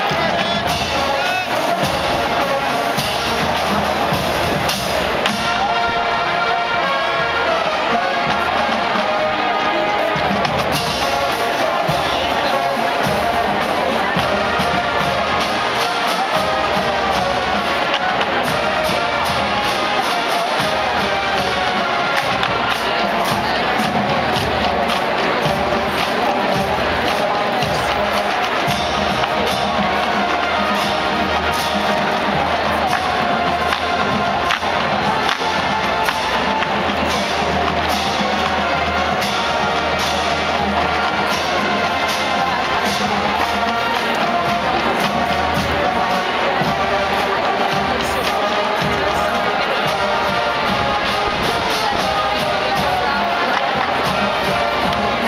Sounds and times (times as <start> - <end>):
Music: 0.0 - 55.2
Speech: 0.0 - 55.2.